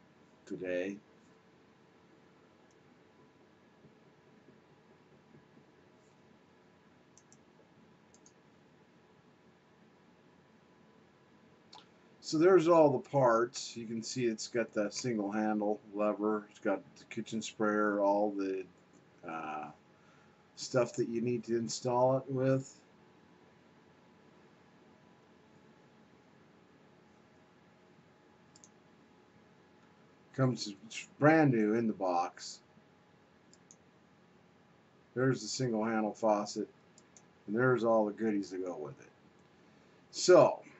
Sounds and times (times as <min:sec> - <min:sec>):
Speech: 0:00.5 - 0:01.0, 0:12.2 - 0:18.6, 0:19.2 - 0:19.8, 0:20.6 - 0:22.8, 0:30.4 - 0:32.6, 0:35.2 - 0:36.7, 0:37.5 - 0:39.0, 0:40.2 - 0:40.7.